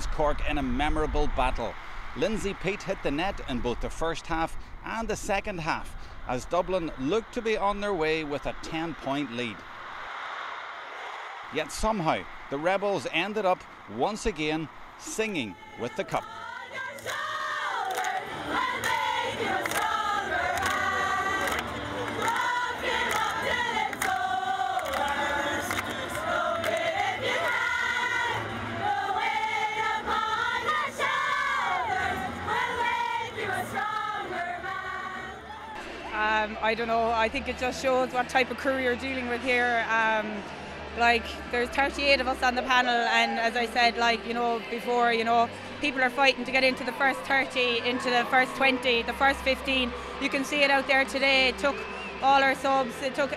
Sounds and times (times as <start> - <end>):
Choir: 15.2 - 35.9.